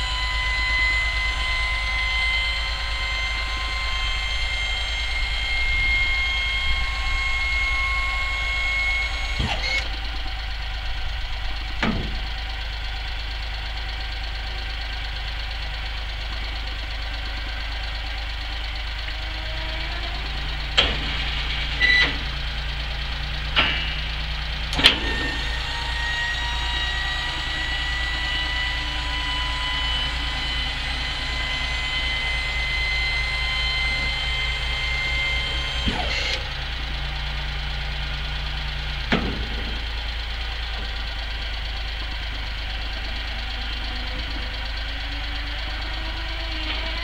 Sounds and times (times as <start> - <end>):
Vehicle: 0.0 - 47.0.